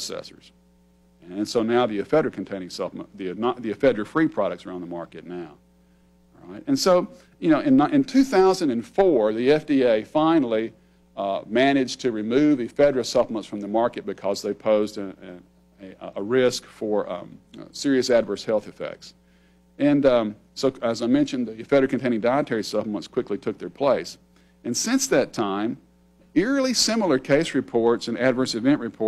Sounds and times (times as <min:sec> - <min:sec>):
Speech: 0:00.0 - 0:00.6, 0:01.2 - 0:05.6, 0:06.4 - 0:19.2, 0:19.8 - 0:29.0.